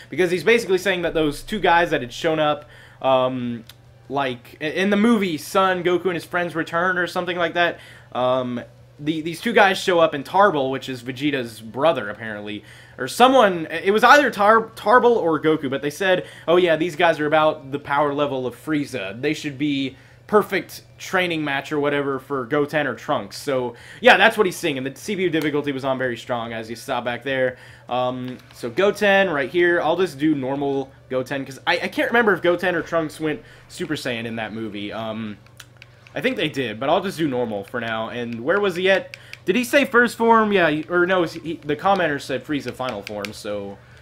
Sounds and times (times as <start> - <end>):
Speech: 0.1 - 35.4, 36.1 - 43.8.